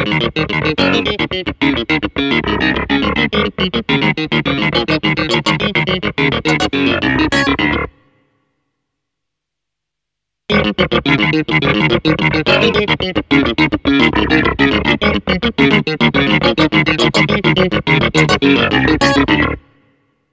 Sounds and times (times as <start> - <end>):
Sampler: 0.0 - 7.9, 10.5 - 19.6.